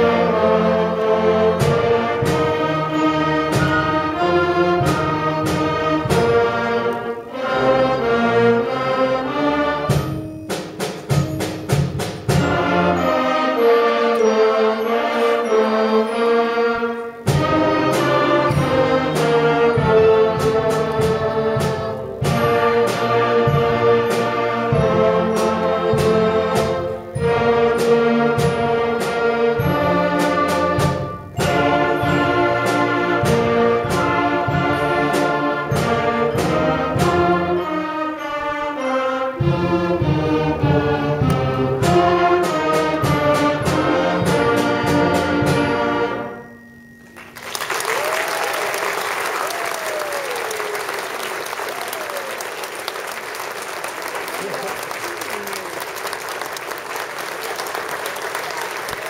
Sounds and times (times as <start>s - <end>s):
Applause: 47.1s - 59.1s
Speech: 54.3s - 55.8s.